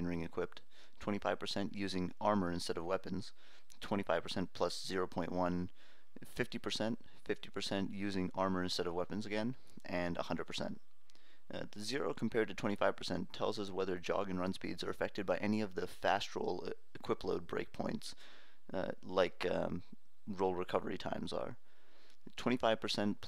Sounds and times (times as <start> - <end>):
Speech: 0.0 - 10.8, 11.5 - 21.6, 22.3 - 23.2.